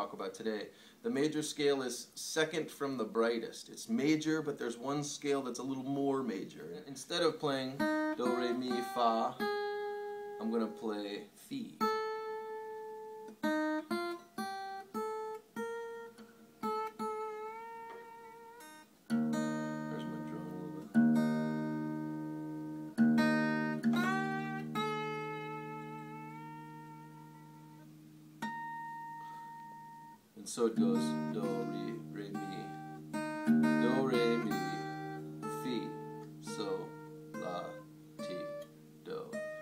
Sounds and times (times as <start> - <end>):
Speech: 0.0 - 9.5, 10.4 - 11.8, 19.8 - 20.9, 30.4 - 32.8, 33.8 - 34.8, 35.5 - 39.4
Acoustic guitar: 0.0 - 39.6
Steel guitar, slide guitar: 15.9 - 30.2, 30.8 - 39.6.